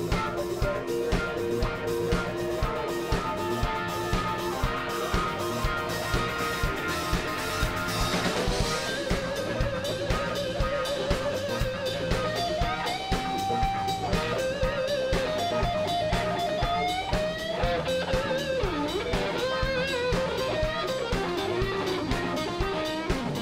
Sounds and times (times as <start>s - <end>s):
Music: 0.0s - 23.4s.